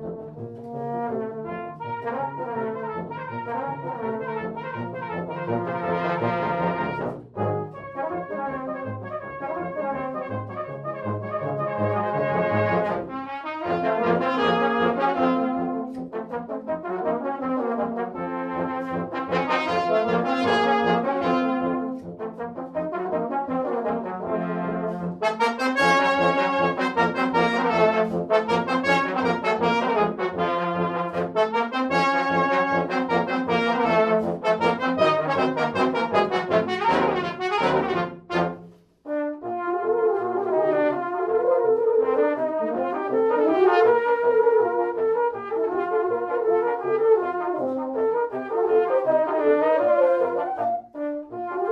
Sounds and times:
French horn: 0.0 - 51.7.

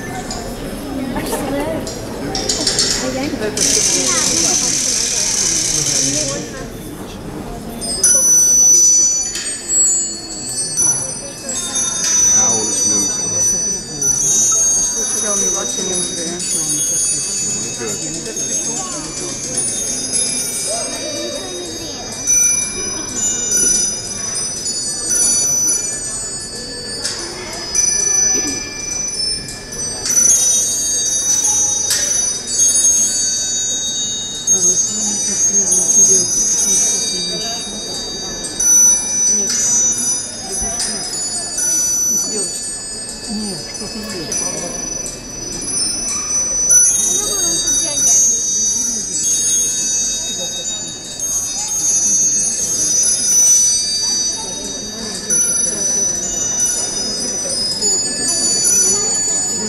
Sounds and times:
Speech: 0.0 - 8.6, 9.7 - 28.8, 34.5 - 48.4, 52.7 - 59.6.

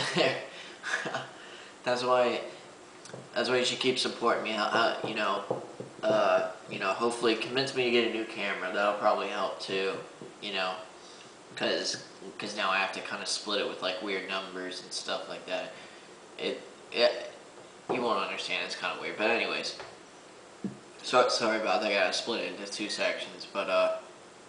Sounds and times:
Speech: 0.0 - 2.6, 3.4 - 10.9, 11.6 - 15.8, 16.4 - 20.0, 21.0 - 24.1
Inside, small room: 0.0 - 24.4.

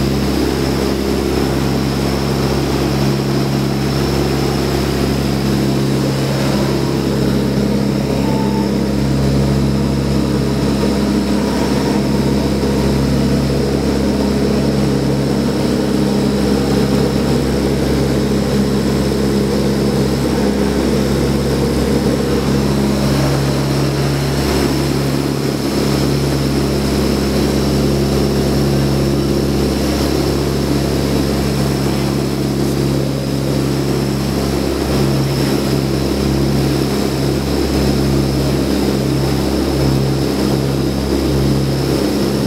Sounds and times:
Vehicle: 0.0 - 42.4.

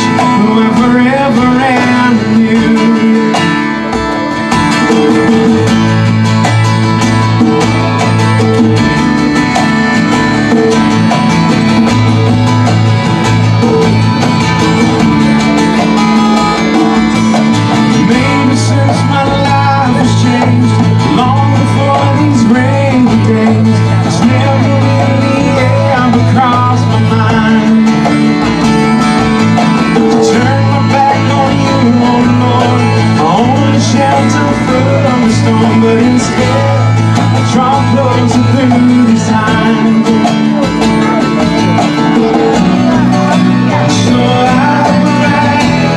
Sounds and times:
Music: 0.0 - 45.9.

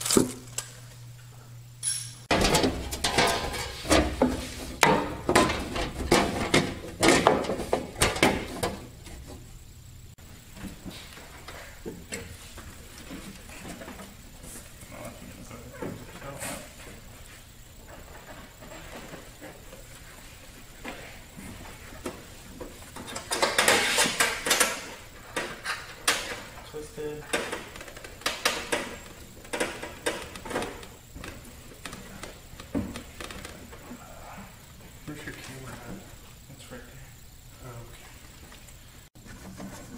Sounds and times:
Speech: 26.6 - 27.3, 35.1 - 38.0.

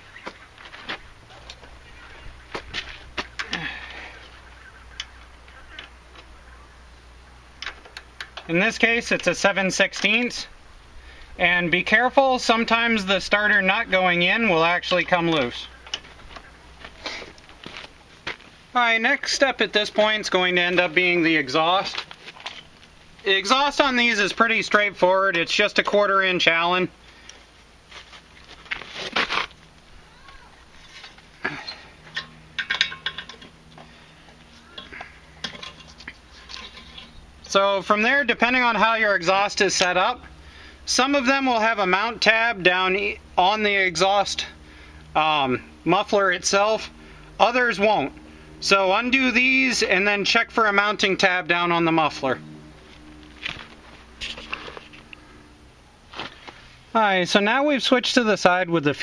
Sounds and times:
Tools: 32.1 - 33.5.

